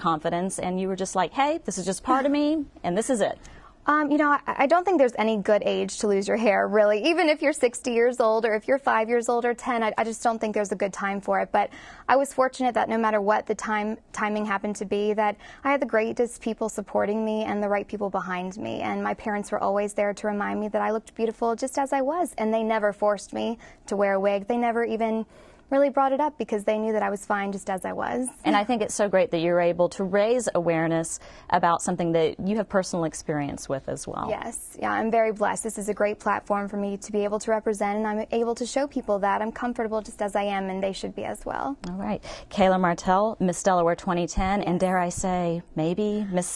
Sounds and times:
Female speech, woman speaking: 0.0 - 46.5.

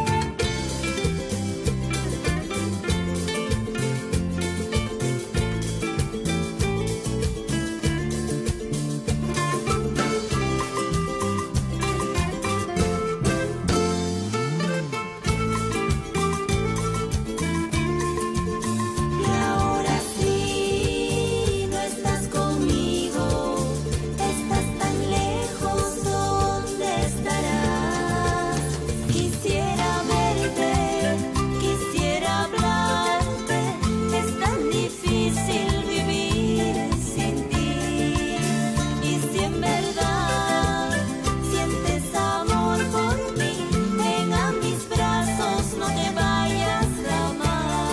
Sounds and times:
Guitar: 0.0 - 47.9
Singing: 19.2 - 47.9.

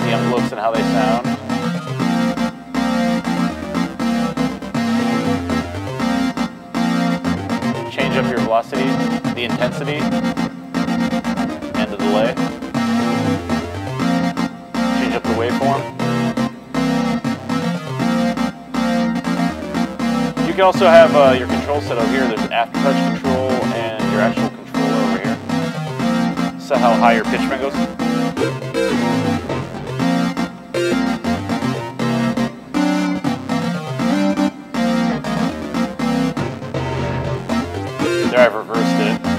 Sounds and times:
Speech: 0.0 - 1.2, 7.9 - 10.1, 11.8 - 12.4, 15.0 - 15.9, 20.4 - 25.4, 26.6 - 27.8, 38.0 - 39.2
Musical instrument: 0.0 - 39.3.

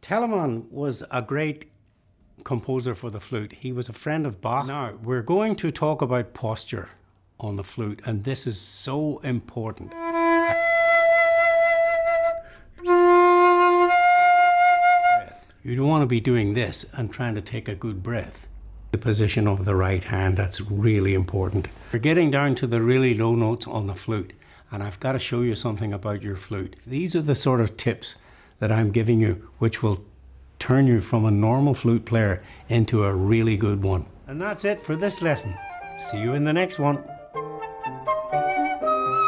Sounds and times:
Speech: 0.0 - 1.8, 2.4 - 10.0, 15.6 - 37.1.

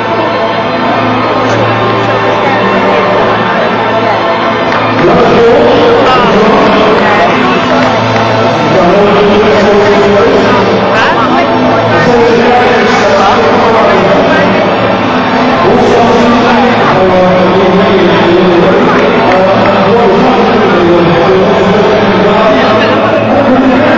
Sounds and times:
Music: 0.0 - 23.9
Speech: 0.0 - 23.9.

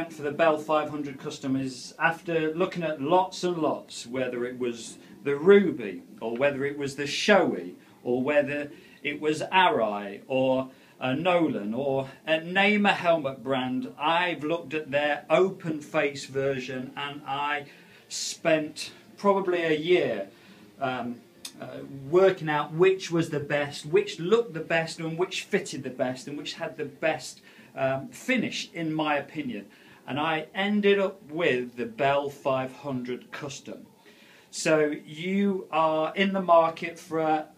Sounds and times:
Speech: 0.0 - 37.5.

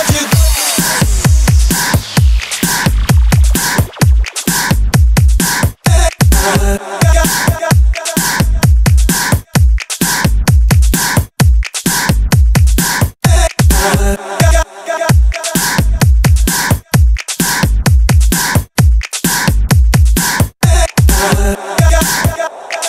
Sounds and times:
Music: 0.0 - 22.8.

